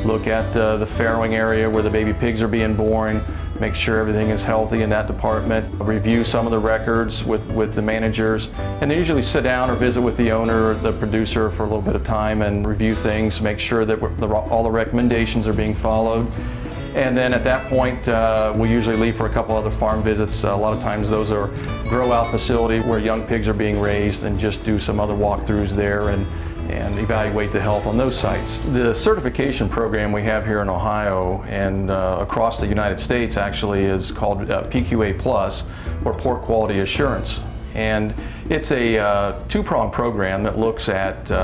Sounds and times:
Speech: 0.0s - 16.4s, 17.0s - 41.4s
Music: 0.0s - 41.4s.

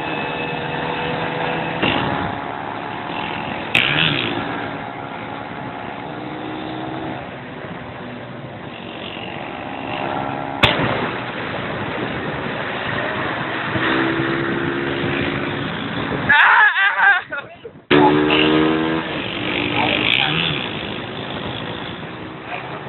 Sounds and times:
Vehicle: 0.0s - 22.8s.

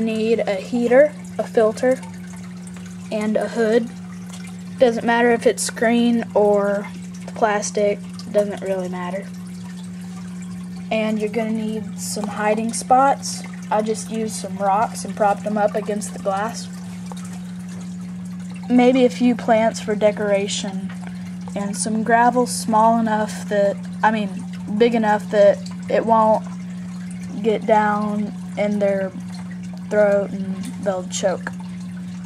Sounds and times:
Speech: 0.0s - 2.1s, 3.1s - 3.9s, 4.8s - 9.3s, 10.9s - 16.7s, 18.7s - 20.9s, 21.6s - 26.4s, 27.4s - 29.2s, 29.9s - 31.6s.

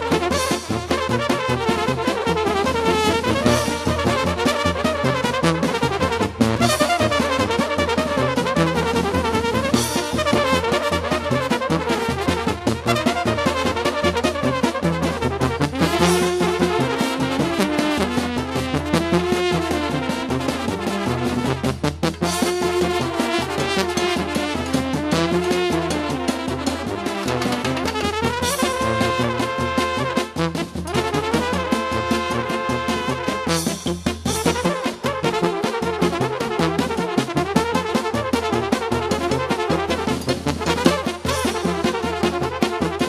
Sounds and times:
Trumpet: 0.0s - 43.0s.

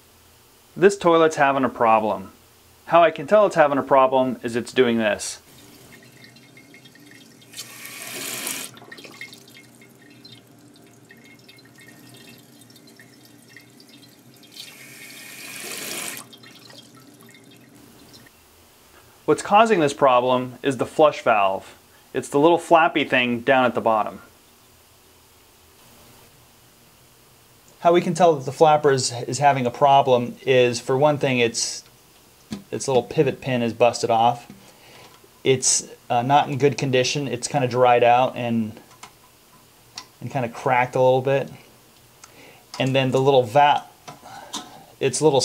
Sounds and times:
Water tap, faucet: 5.5s - 18.3s.

